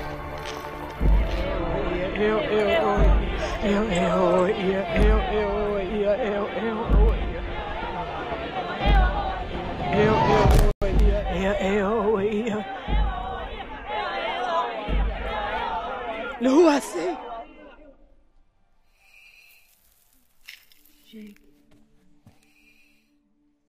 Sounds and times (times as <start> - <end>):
Speech: 16.4 - 17.2.